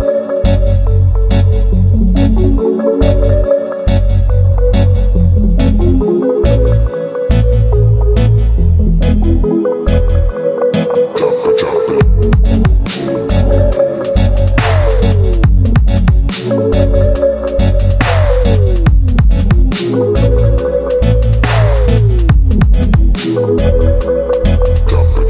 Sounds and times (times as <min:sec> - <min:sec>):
Music: 0:00.0 - 0:25.2.